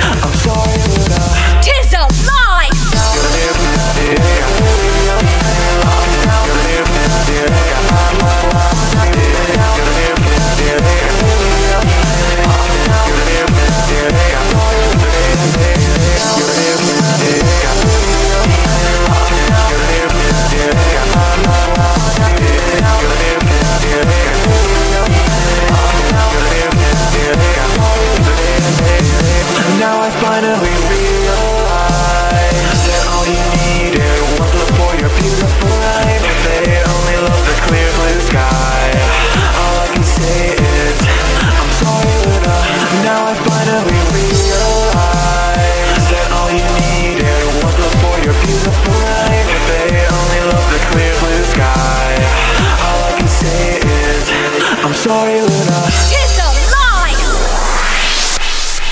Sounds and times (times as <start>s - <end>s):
Music: 0.0s - 58.9s.